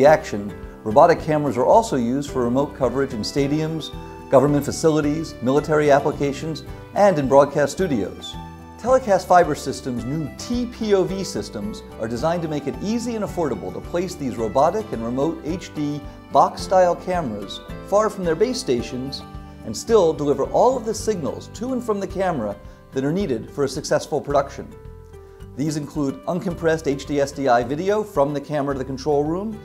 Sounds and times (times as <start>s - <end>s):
Speech: 0.0s - 24.8s, 25.6s - 29.6s
Music: 0.0s - 29.6s.